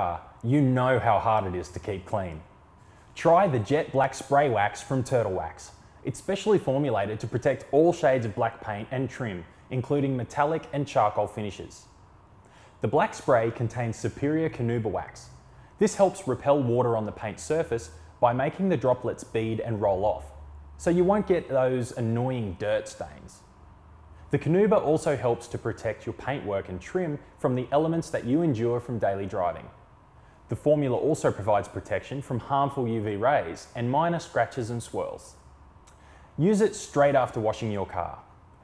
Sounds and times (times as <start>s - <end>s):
Speech: 0.0s - 2.5s, 3.2s - 11.9s, 12.8s - 23.5s, 24.3s - 29.8s, 30.5s - 35.4s, 36.4s - 38.3s.